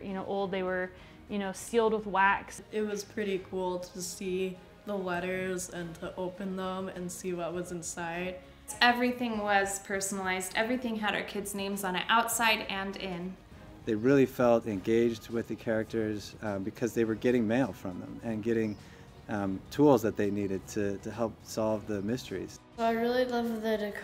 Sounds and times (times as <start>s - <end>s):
Music: 0.0s - 24.0s.